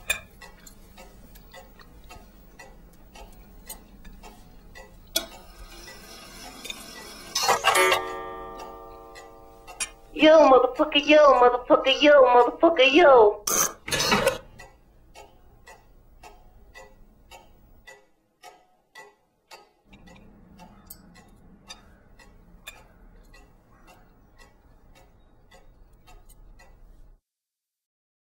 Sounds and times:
Clock: 0:00.0 - 0:27.2.

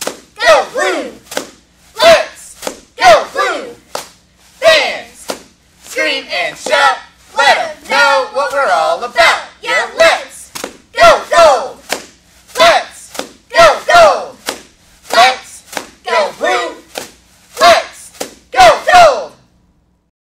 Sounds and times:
Speech: 0:00.4 - 0:01.2, 0:02.0 - 0:03.8, 0:04.6 - 0:05.3, 0:05.9 - 0:11.8, 0:12.6 - 0:14.4, 0:15.1 - 0:16.9, 0:17.6 - 0:19.4.

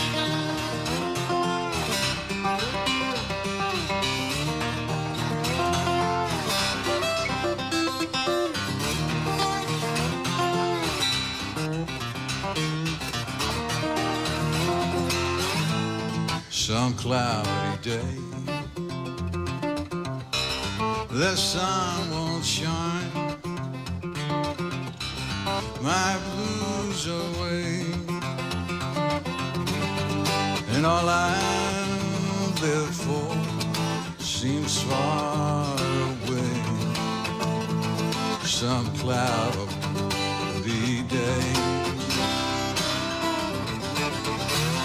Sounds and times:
Music: 0:00.0 - 0:44.8.

